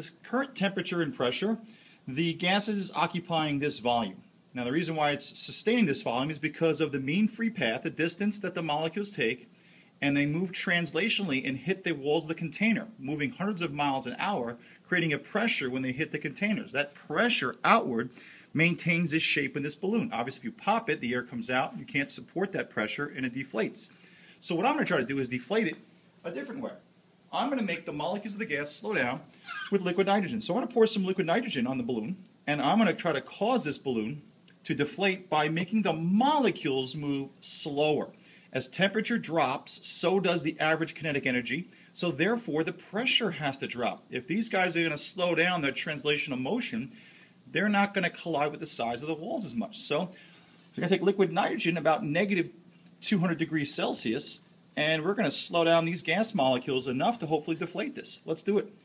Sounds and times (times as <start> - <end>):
Speech: 0.0 - 58.8.